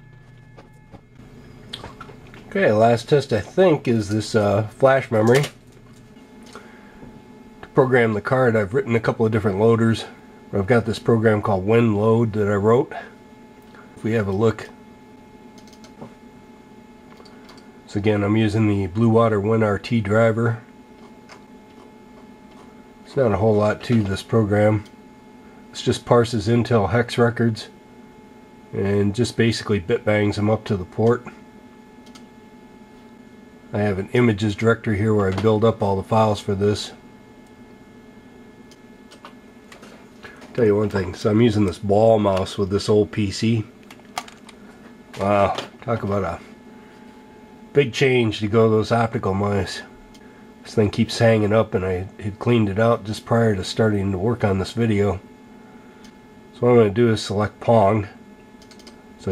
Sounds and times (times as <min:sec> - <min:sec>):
Speech: 0:02.5 - 0:05.6, 0:07.6 - 0:13.2, 0:14.0 - 0:14.8, 0:17.9 - 0:20.7, 0:23.0 - 0:24.9, 0:25.7 - 0:27.8, 0:28.7 - 0:31.4, 0:33.7 - 0:37.0, 0:40.5 - 0:43.7, 0:45.2 - 0:46.6, 0:47.7 - 0:50.0, 0:50.6 - 0:55.3, 0:56.5 - 0:58.2.